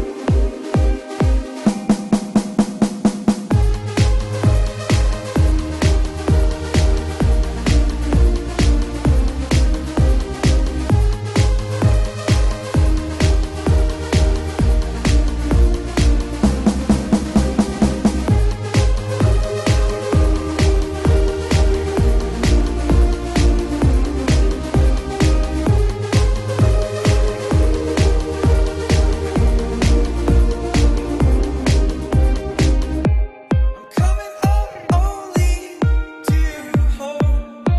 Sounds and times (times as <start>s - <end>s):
Music: 0.0s - 37.7s.